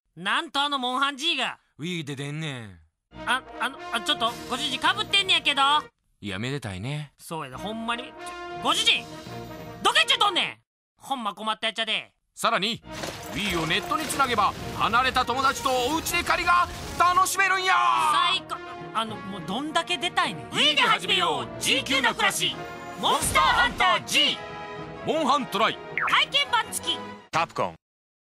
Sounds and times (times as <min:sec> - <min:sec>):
Speech: 0:00.2 - 0:09.0, 0:09.9 - 0:12.8, 0:13.4 - 0:24.4, 0:25.1 - 0:27.8
Music: 0:03.1 - 0:06.0, 0:07.3 - 0:10.6, 0:12.4 - 0:27.8.